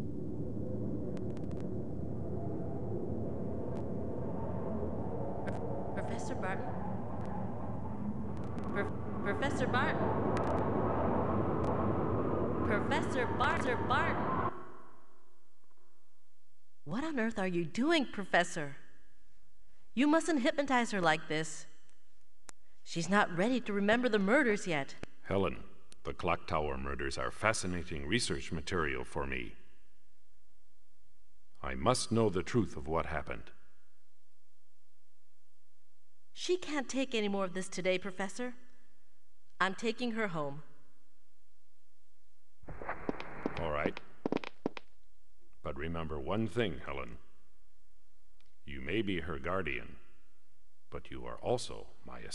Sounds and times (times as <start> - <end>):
Speech: 6.0 - 6.6, 8.8 - 10.0, 12.7 - 14.2, 16.9 - 18.8, 20.0 - 21.6, 22.9 - 29.5, 31.6 - 33.5, 36.4 - 38.6, 39.6 - 40.6, 43.6 - 44.0, 45.7 - 47.2, 48.7 - 50.0, 51.0 - 52.3.